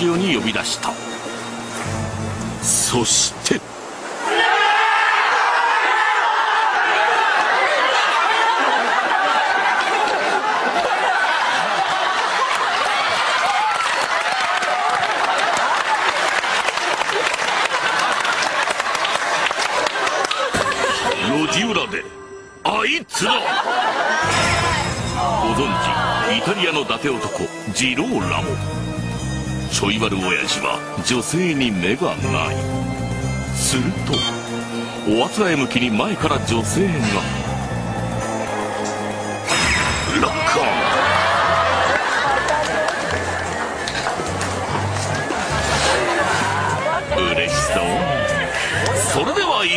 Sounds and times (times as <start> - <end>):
Music: 0.0 - 3.6, 20.5 - 23.3, 24.2 - 49.7
Speech: 25.3 - 28.6, 29.8 - 32.6, 35.1 - 37.3, 47.1 - 49.7.